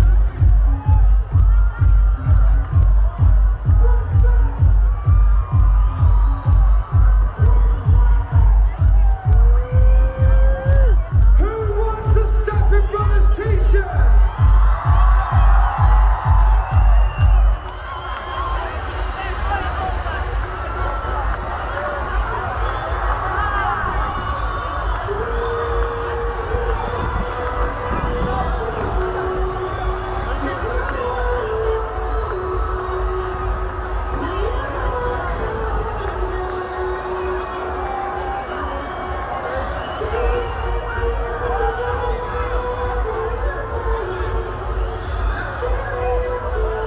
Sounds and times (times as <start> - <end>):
Music: 0.0 - 46.8.